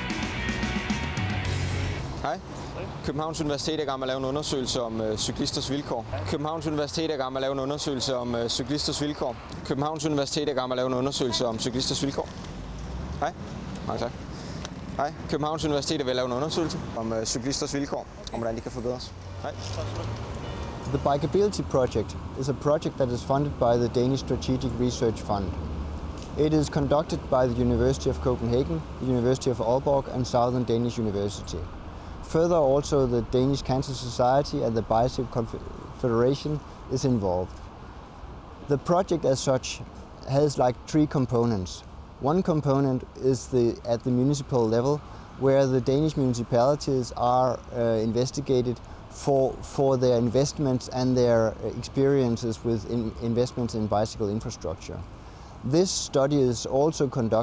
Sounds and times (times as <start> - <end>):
Speech: 3.0 - 12.3, 13.2 - 14.2, 26.4 - 31.7, 32.3 - 37.5, 38.7 - 55.1, 55.7 - 57.4.